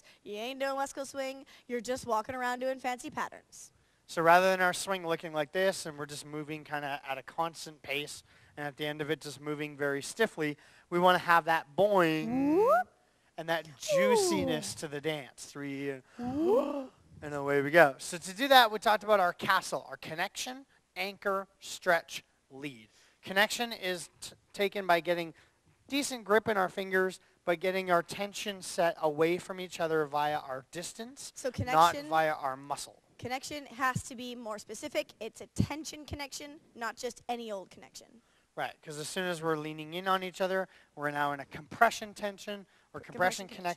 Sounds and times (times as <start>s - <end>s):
Speech: 0.3s - 12.8s, 13.4s - 43.7s.